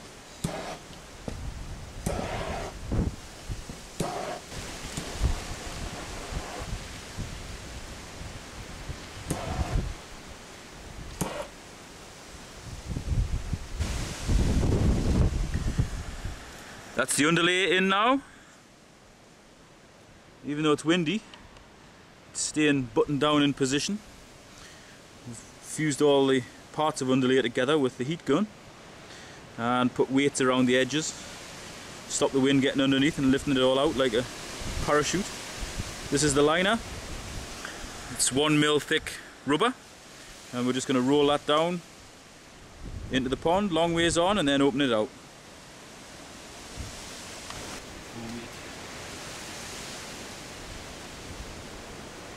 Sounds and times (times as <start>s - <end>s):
Outside, rural or natural: 0.0s - 52.3s
Speech: 17.0s - 18.3s, 20.4s - 21.2s, 22.4s - 24.0s, 25.2s - 28.5s, 29.6s - 31.2s, 32.1s - 35.3s, 36.1s - 36.8s, 38.1s - 39.8s, 40.5s - 41.8s, 43.1s - 45.1s, 48.1s - 48.6s.